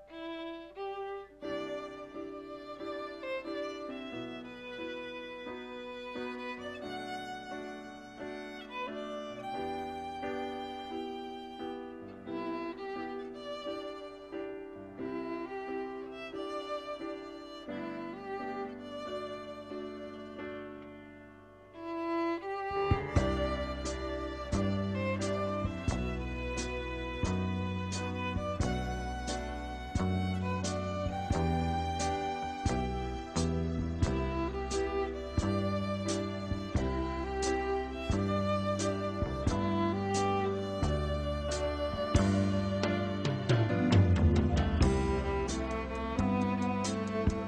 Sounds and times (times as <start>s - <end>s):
Violin, fiddle: 0.0s - 47.4s.